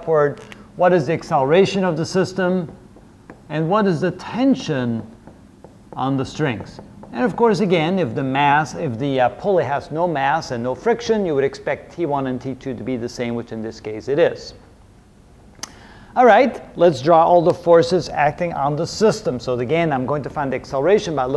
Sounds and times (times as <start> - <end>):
Speech: 0.0 - 2.8, 3.5 - 5.1, 6.0 - 14.6, 16.2 - 21.3.